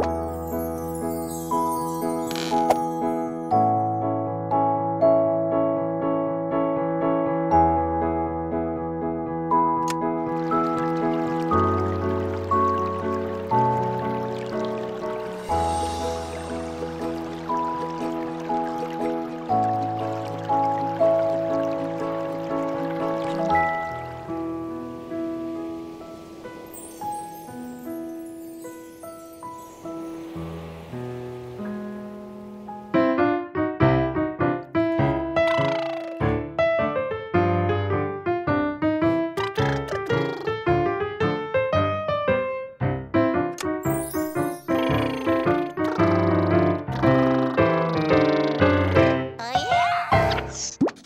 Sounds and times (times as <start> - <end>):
Music: 0.0 - 51.0.